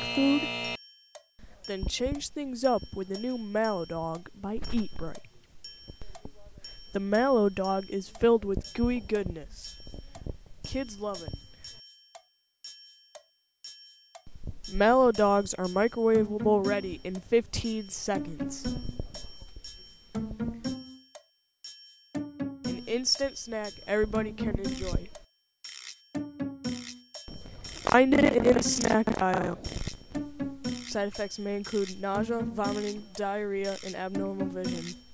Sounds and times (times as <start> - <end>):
Speech: 1.7 - 5.3, 6.2 - 9.7, 10.7 - 11.4, 14.7 - 18.7, 22.9 - 25.2, 27.9 - 29.6, 30.9 - 35.0.